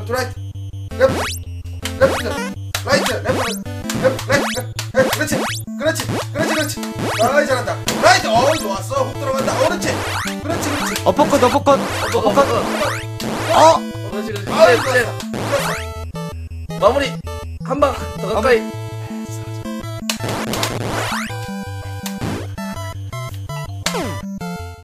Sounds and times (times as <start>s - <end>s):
Sound effect: 0.9s - 8.7s, 9.3s - 16.0s, 19.6s - 24.6s.